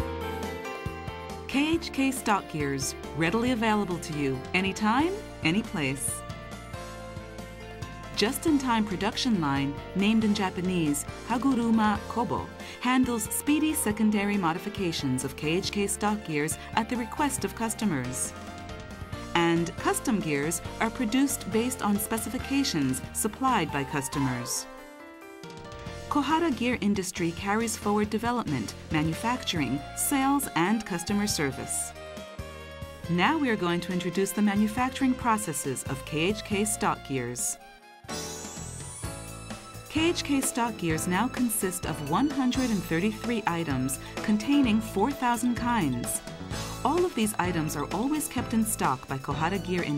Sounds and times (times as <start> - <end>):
Music: 0.0 - 49.9
Speech: 1.5 - 6.2, 8.2 - 18.3, 19.4 - 24.7, 26.1 - 31.9, 33.1 - 37.6, 39.9 - 46.2, 46.8 - 49.9.